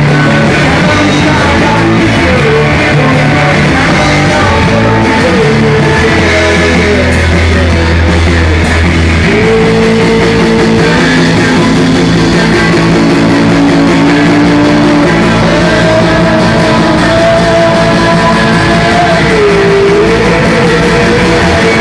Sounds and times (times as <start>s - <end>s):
Music: 0.0s - 21.8s.